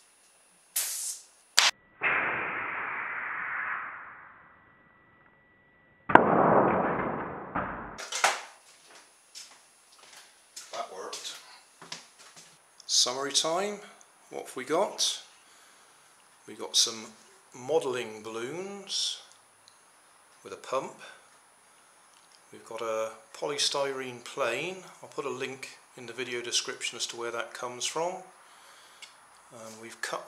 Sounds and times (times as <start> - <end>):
Speech: 10.7 - 11.6, 12.9 - 15.3, 16.5 - 19.3, 20.4 - 21.2, 22.5 - 28.3, 29.5 - 30.2.